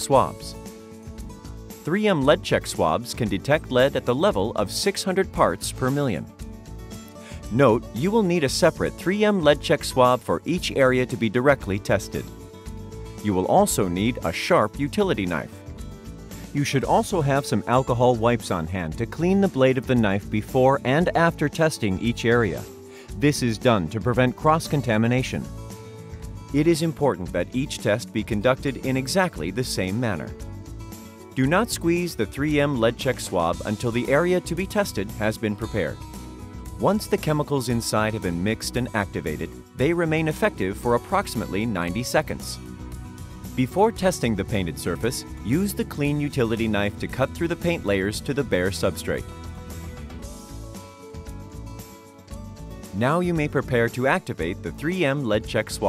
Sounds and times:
Speech: 0.0 - 0.6, 1.8 - 6.3, 7.3 - 12.3, 13.2 - 15.6, 16.6 - 25.5, 26.5 - 30.4, 31.4 - 36.0, 36.8 - 42.6, 43.6 - 49.3, 53.0 - 55.8
Music: 0.0 - 55.8.

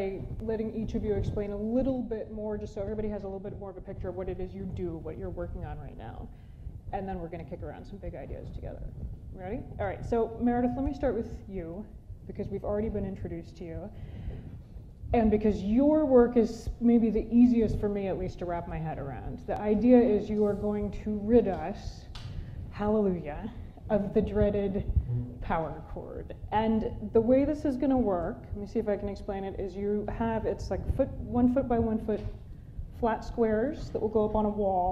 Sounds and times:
Speech: 0.0 - 6.3, 7.0 - 14.0, 15.2 - 22.1, 22.7 - 32.3, 33.0 - 34.9.

